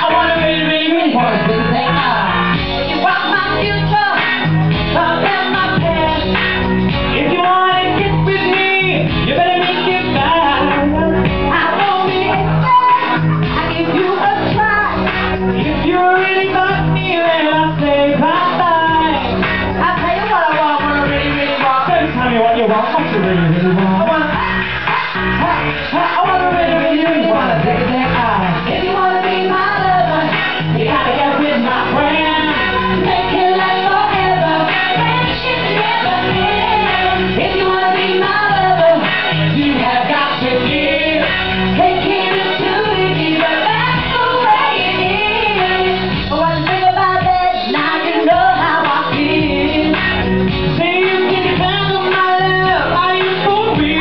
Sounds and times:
Music: 0.0s - 54.0s
Female singing: 3.0s - 4.3s, 5.0s - 6.3s, 7.2s - 15.0s, 19.8s - 22.1s, 25.4s - 50.2s, 50.8s - 54.0s.

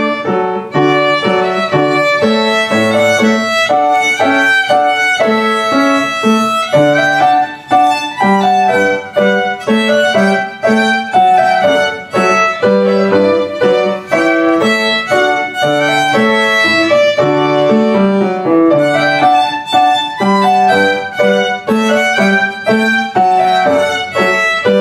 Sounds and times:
Violin, fiddle: 0.0s - 24.8s.

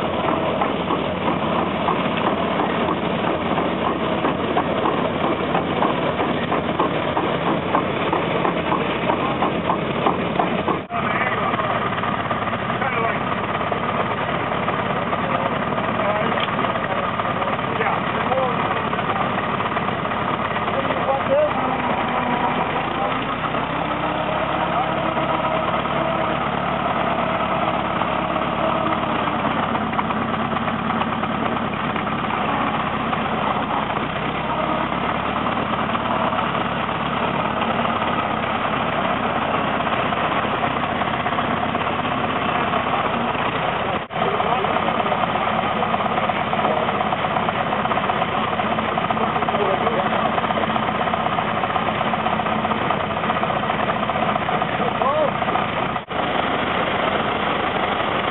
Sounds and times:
Truck: 0.0s - 58.3s.

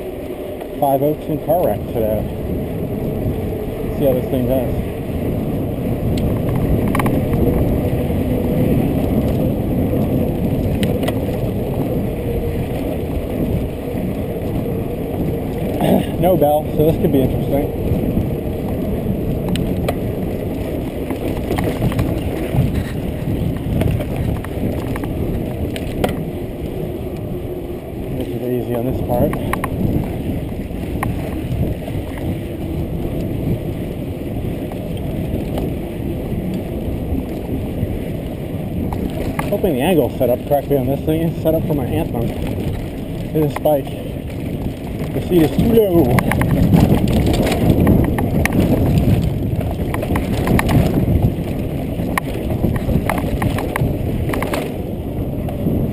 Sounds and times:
Speech: 0.8s - 2.3s, 4.0s - 4.8s, 15.8s - 17.7s, 28.2s - 29.5s, 39.5s - 42.3s, 43.3s - 43.9s, 45.2s - 46.2s.

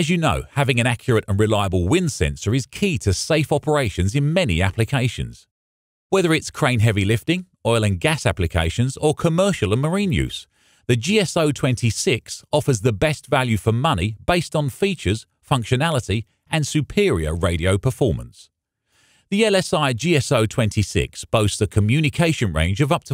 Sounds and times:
Speech: 0.0s - 5.5s, 6.2s - 18.5s, 19.3s - 23.1s.

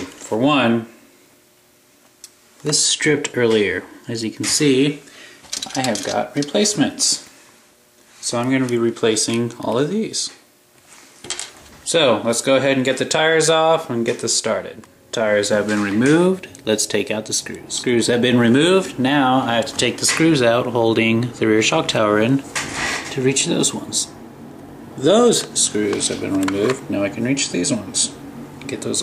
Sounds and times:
Speech: 0.0s - 1.0s, 2.6s - 5.1s, 5.7s - 7.3s, 8.2s - 10.4s, 11.8s - 22.5s, 23.1s - 24.2s, 25.0s - 29.0s.

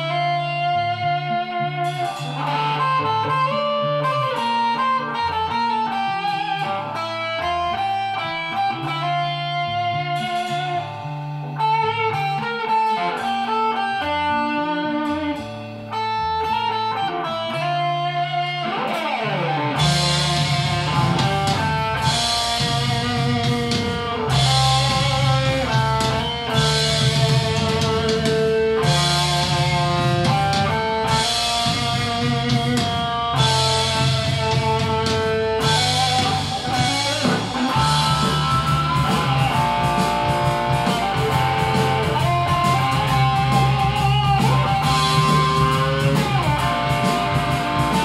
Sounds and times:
Electric guitar: 0.0s - 48.0s
Strum: 0.0s - 48.0s.

